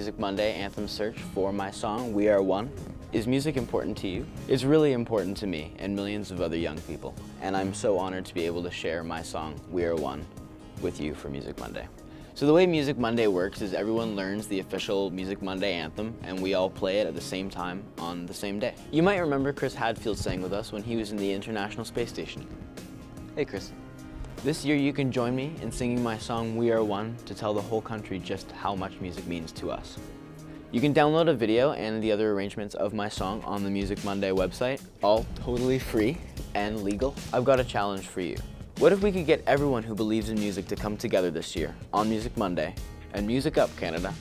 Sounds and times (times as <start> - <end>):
Speech: 0.0 - 22.5, 23.4 - 23.8, 24.4 - 30.0, 30.7 - 44.2
Music: 0.0 - 44.2.